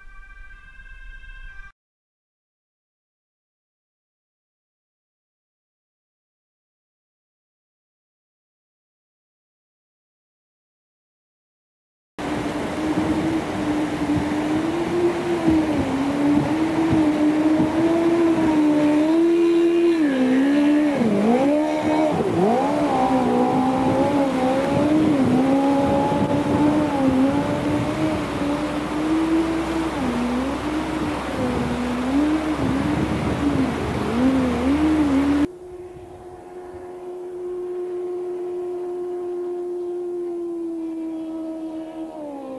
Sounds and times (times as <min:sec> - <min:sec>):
Motorboat, speedboat: 0:12.2 - 0:42.5.